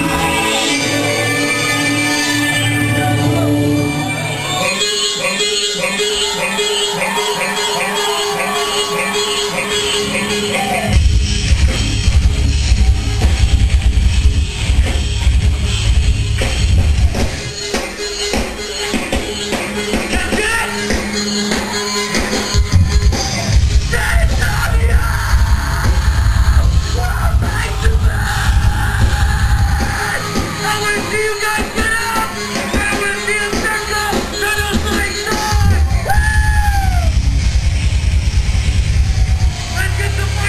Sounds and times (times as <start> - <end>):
Music: 0.0 - 40.4.